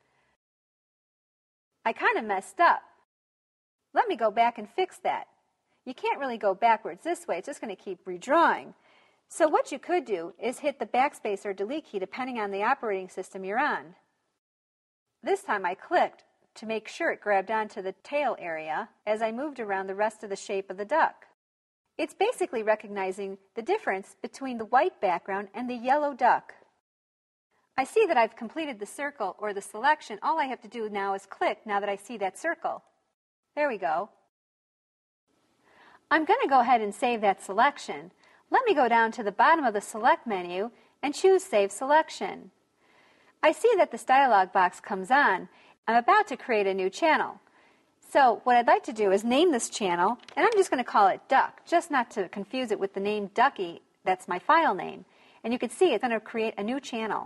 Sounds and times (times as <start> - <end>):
Speech: 1.9 - 3.0, 4.0 - 14.0, 15.2 - 21.3, 22.0 - 26.7, 27.8 - 32.9, 33.6 - 34.2, 36.1 - 42.6, 43.4 - 47.4, 48.0 - 57.2.